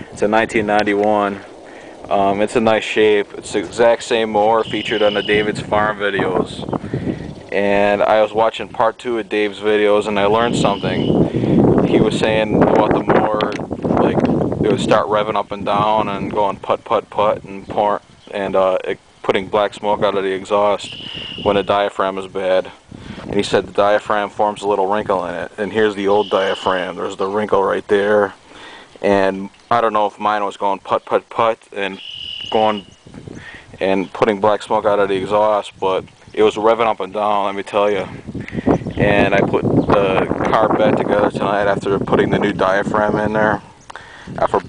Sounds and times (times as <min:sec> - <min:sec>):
Speech: 0:00.2 - 0:01.5, 0:02.1 - 0:06.7, 0:07.5 - 0:11.2, 0:11.8 - 0:28.4, 0:29.0 - 0:32.9, 0:33.7 - 0:38.2, 0:39.0 - 0:43.7, 0:44.4 - 0:44.6.